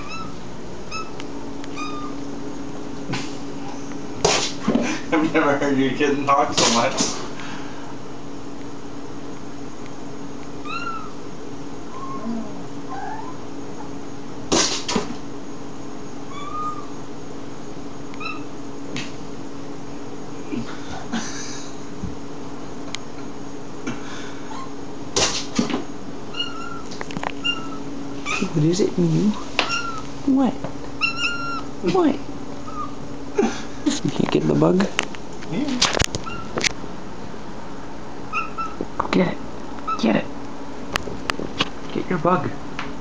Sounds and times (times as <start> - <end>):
Cat: 0.0 - 2.2, 10.6 - 11.2, 11.9 - 13.4, 16.3 - 17.0, 18.2 - 18.5, 26.3 - 28.5, 29.6 - 30.1, 31.0 - 31.7, 32.6 - 33.0, 36.2 - 36.6, 38.3 - 38.8.